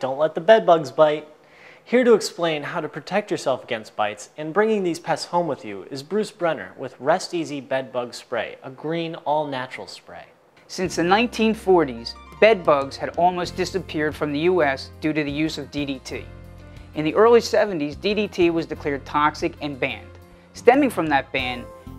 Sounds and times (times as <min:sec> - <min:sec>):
Speech: 0:00.0 - 0:01.3, 0:01.9 - 0:16.3, 0:17.0 - 0:21.7
Music: 0:10.8 - 0:21.9.